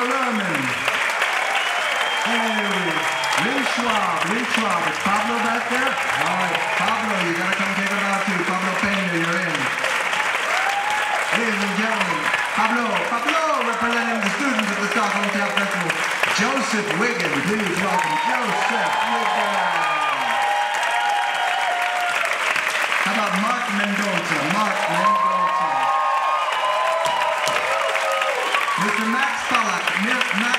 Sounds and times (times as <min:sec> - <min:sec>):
Speech: 0:00.0 - 0:00.8, 0:02.2 - 0:09.8, 0:11.3 - 0:20.2, 0:23.0 - 0:25.9, 0:28.8 - 0:30.5.